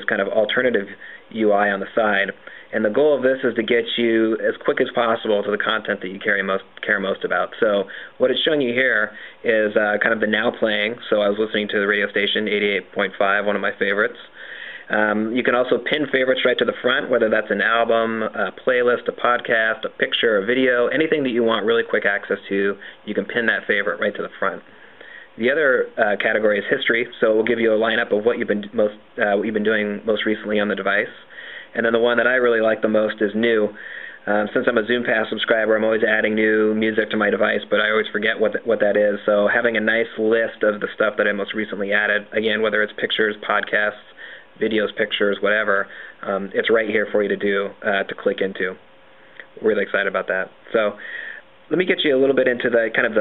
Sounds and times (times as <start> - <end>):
Speech: 0.0 - 24.7, 25.4 - 48.8, 49.4 - 51.0, 51.7 - 53.2.